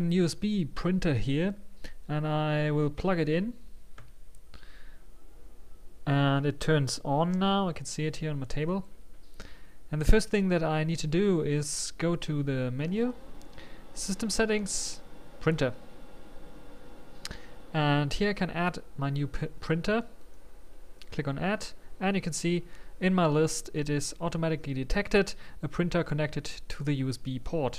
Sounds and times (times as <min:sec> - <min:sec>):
Speech: 0:00.0 - 0:03.6, 0:06.0 - 0:08.9, 0:09.9 - 0:13.2, 0:14.0 - 0:15.8, 0:17.7 - 0:20.1, 0:21.1 - 0:27.7.